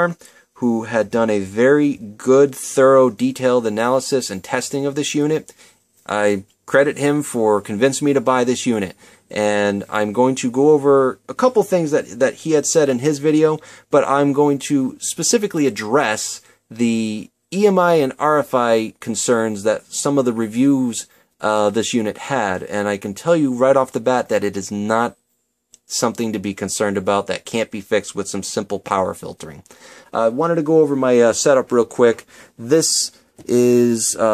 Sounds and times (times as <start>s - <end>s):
Speech: 0.0s - 25.2s, 25.8s - 34.3s.